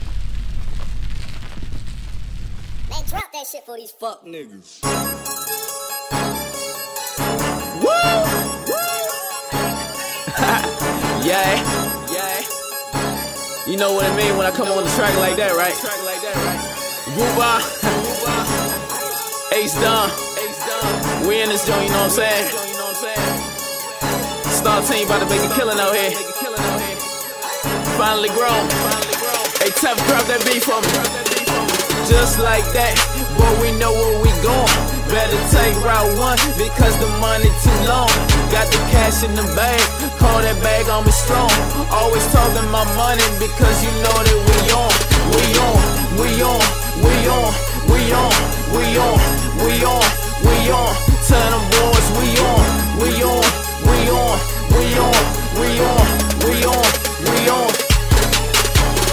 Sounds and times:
Background music: 0:04.6 - 0:59.1.

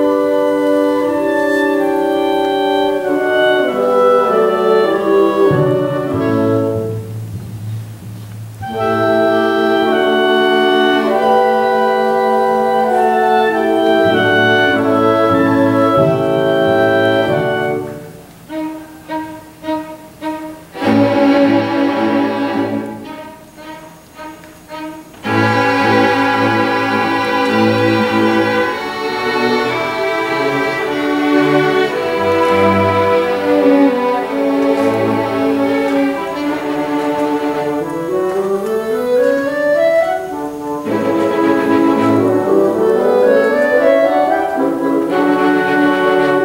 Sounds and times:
Musical instrument: 0:00.0 - 0:46.4.

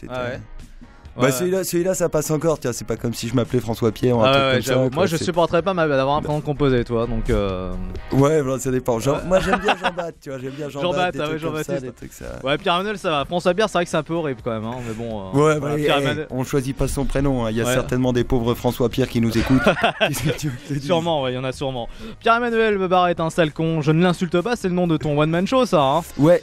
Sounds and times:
Music: 0:00.0 - 0:26.4
Speech: 0:01.2 - 0:26.4.

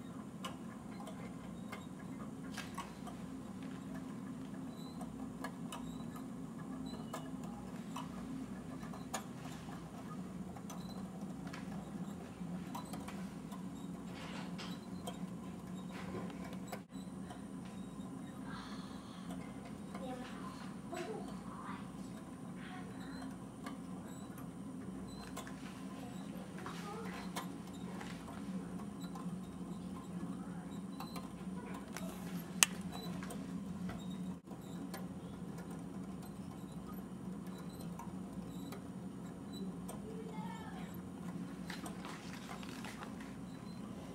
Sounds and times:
Speech: 0:19.9 - 0:23.3, 0:25.9 - 0:27.4, 0:40.0 - 0:41.0.

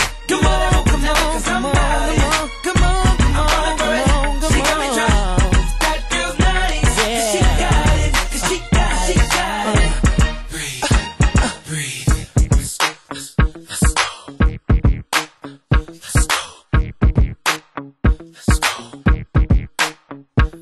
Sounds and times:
Hip hop music: 0:00.0 - 0:20.6.

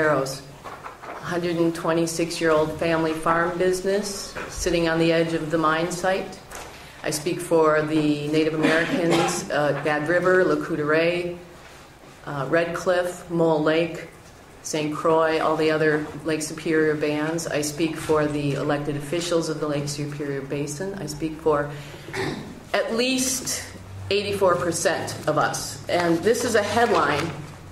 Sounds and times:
Speech: 0:00.0 - 0:00.5, 0:01.2 - 0:06.4, 0:07.0 - 0:11.4, 0:12.2 - 0:21.8, 0:22.7 - 0:27.4.

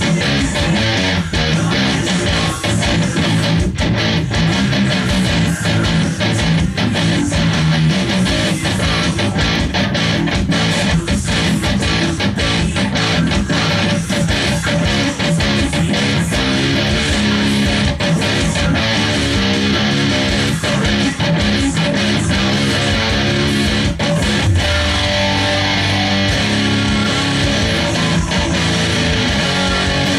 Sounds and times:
Electric guitar: 0:00.0 - 0:30.1.

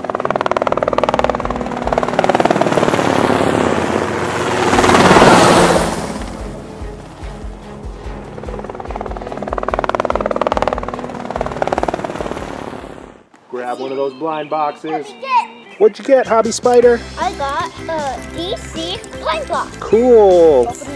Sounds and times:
Helicopter: 0:00.0 - 0:13.3
Music: 0:06.2 - 0:12.2, 0:13.6 - 0:20.9.

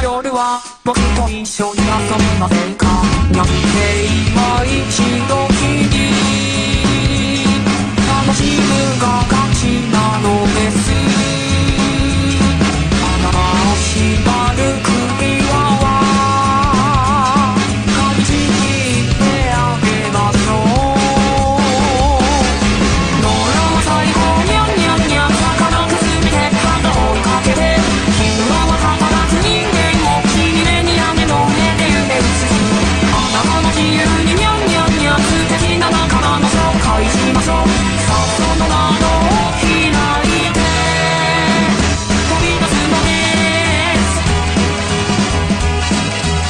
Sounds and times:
Music: 0:00.0 - 0:46.4.

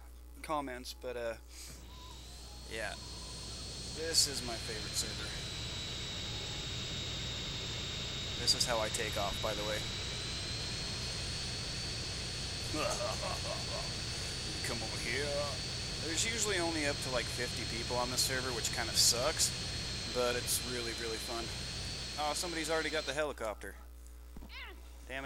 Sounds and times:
Speech: 0:00.4 - 0:01.4, 0:02.7 - 0:03.0, 0:04.0 - 0:05.4, 0:08.4 - 0:09.9, 0:12.7 - 0:13.8, 0:14.5 - 0:21.6, 0:22.2 - 0:23.8, 0:24.6 - 0:25.2.

